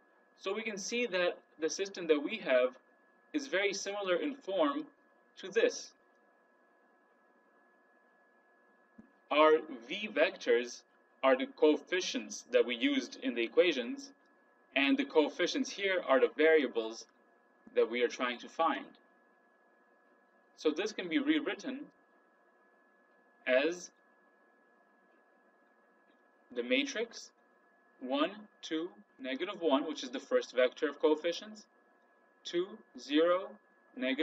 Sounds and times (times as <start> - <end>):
Speech: 0.4 - 2.8, 3.4 - 5.9, 9.3 - 14.1, 14.8 - 17.1, 17.8 - 19.0, 20.6 - 21.9, 23.5 - 23.9, 26.6 - 27.3, 28.0 - 31.6, 32.5 - 34.2.